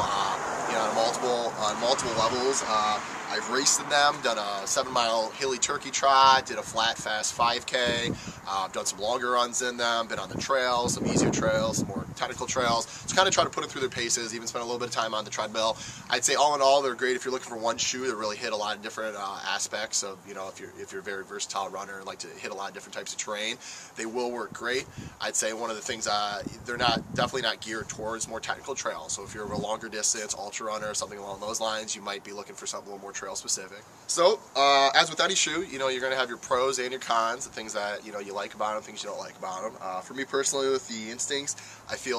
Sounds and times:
Outside, urban or manmade: 0:00.0 - 0:42.1
Speech: 0:00.0 - 0:42.1.

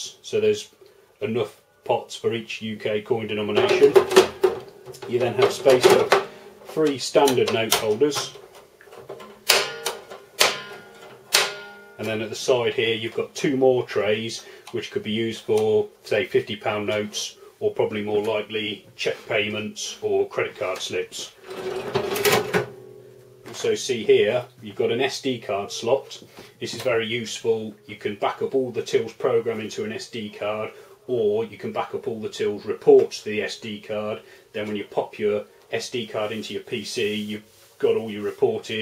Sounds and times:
Speech: 0:00.0 - 0:04.1, 0:05.0 - 0:08.4, 0:12.0 - 0:21.4, 0:23.5 - 0:38.8
Cash register: 0:09.2 - 0:12.0, 0:21.4 - 0:23.0.

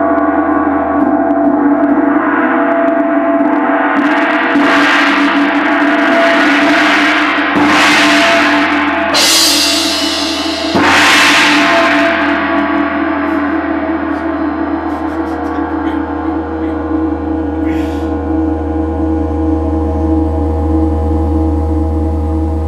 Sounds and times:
Gong: 0:00.0 - 0:22.6.

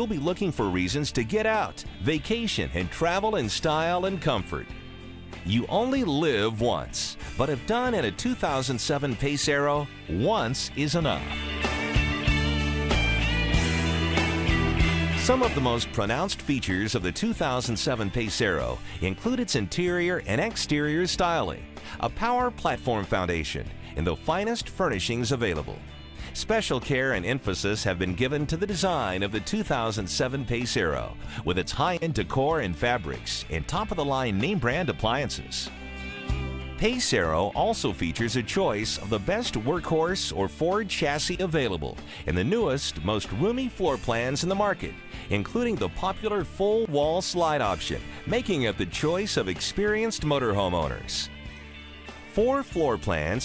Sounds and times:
Speech: 0:00.0 - 0:04.7, 0:05.5 - 0:11.4, 0:15.2 - 0:35.7, 0:36.8 - 0:51.3, 0:52.3 - 0:53.4
Music: 0:00.0 - 0:53.4.

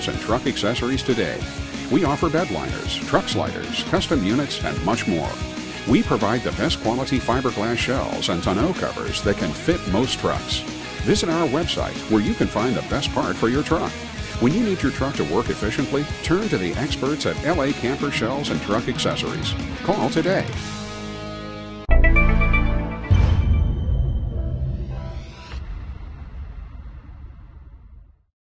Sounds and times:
Speech: 0:00.0 - 0:20.6
Music: 0:00.0 - 0:27.3.

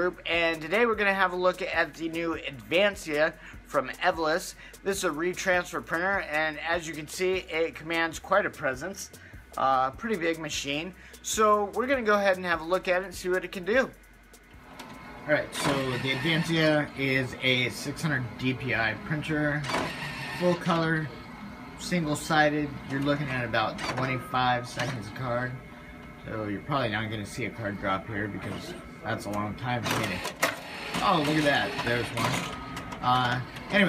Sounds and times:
Speech: 0:00.0 - 0:14.0, 0:15.3 - 0:19.7, 0:20.4 - 0:21.1, 0:21.8 - 0:25.6, 0:26.3 - 0:30.3, 0:31.0 - 0:32.3, 0:33.0 - 0:33.8
Printer: 0:14.6 - 0:33.8.

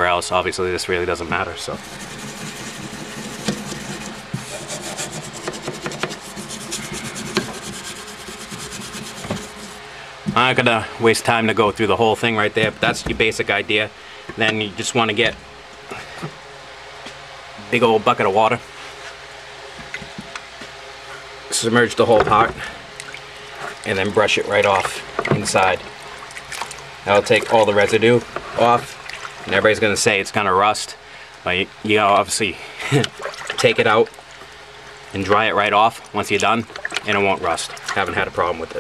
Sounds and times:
Trickle, dribble: 0:22.4 - 0:29.8, 0:32.9 - 0:38.8.

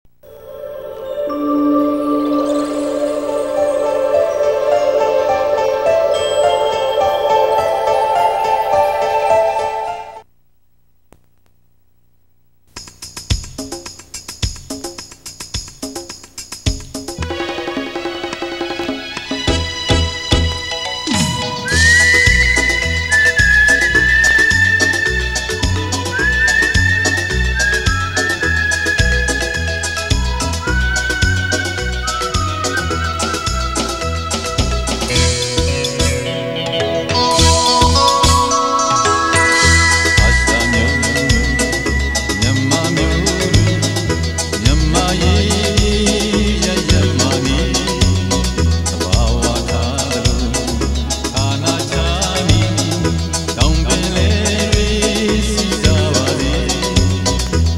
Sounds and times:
Music: 0:00.2 - 0:10.2, 0:13.1 - 0:57.7.

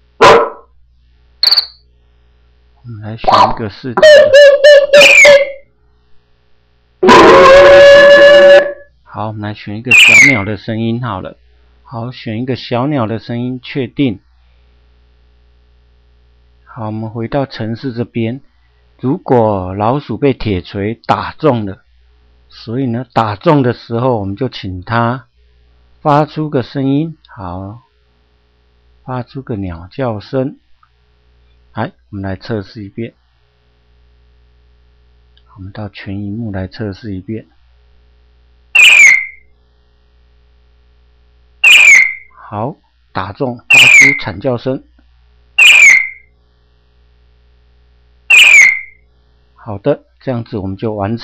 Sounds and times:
Speech: 0:02.8 - 0:04.4, 0:08.6 - 0:14.3, 0:16.7 - 0:21.9, 0:22.5 - 0:25.4, 0:26.0 - 0:27.9, 0:29.0 - 0:30.6, 0:31.8 - 0:33.2, 0:35.5 - 0:37.6, 0:42.4 - 0:45.0, 0:49.6 - 0:51.2.

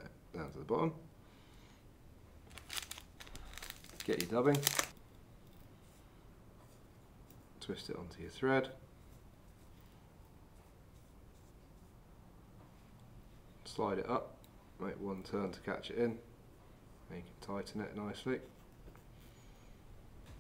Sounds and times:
Speech: 0:00.0 - 0:01.0, 0:04.0 - 0:04.8, 0:07.6 - 0:08.8, 0:13.6 - 0:16.3, 0:17.1 - 0:18.6
Crumpling, crinkling: 0:02.5 - 0:05.0.

